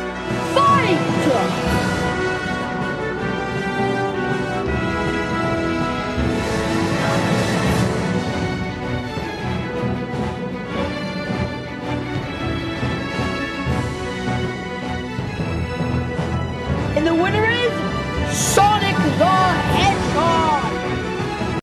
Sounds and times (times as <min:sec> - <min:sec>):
Music: 0:00.0 - 0:21.6
Speech: 0:00.5 - 0:01.6, 0:17.0 - 0:20.8.